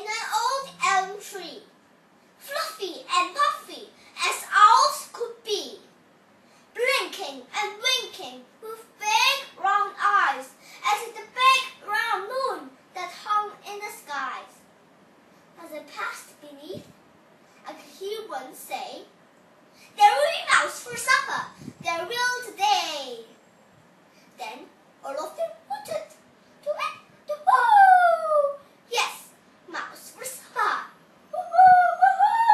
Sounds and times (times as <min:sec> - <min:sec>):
Child speech, kid speaking: 0:00.0 - 0:01.8, 0:02.4 - 0:06.0, 0:06.8 - 0:14.6, 0:15.6 - 0:17.0, 0:17.6 - 0:19.2, 0:19.9 - 0:23.4, 0:24.4 - 0:32.5.